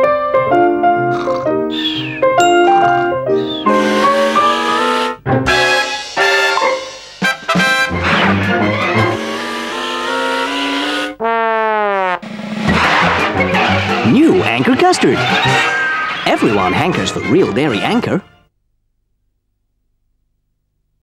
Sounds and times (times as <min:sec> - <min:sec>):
Music: 0:00.0 - 0:11.2, 0:12.4 - 0:18.5
Speech: 0:14.0 - 0:15.2, 0:16.3 - 0:18.3.